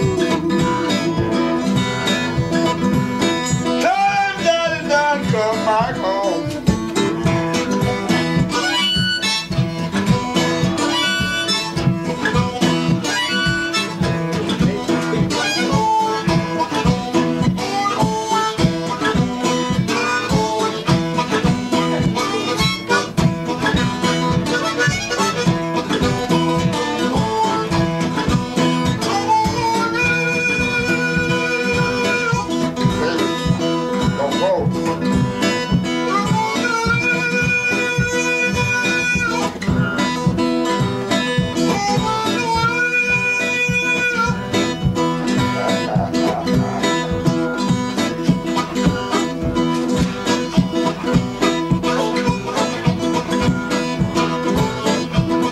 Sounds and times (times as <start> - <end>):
Music: 0.0 - 55.5.